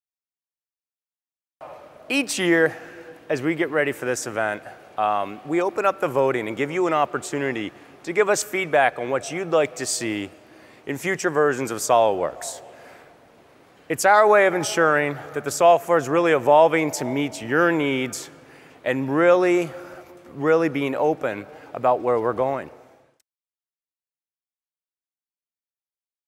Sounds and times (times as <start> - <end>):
Speech: 1.6 - 12.7, 13.9 - 22.8.